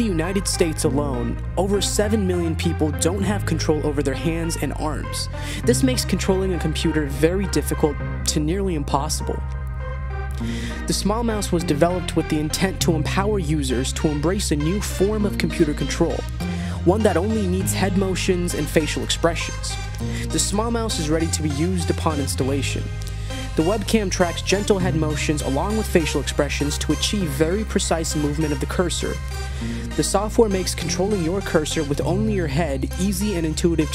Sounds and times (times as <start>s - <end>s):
Speech: 0.0s - 9.4s, 10.8s - 33.9s
Music: 0.0s - 33.9s.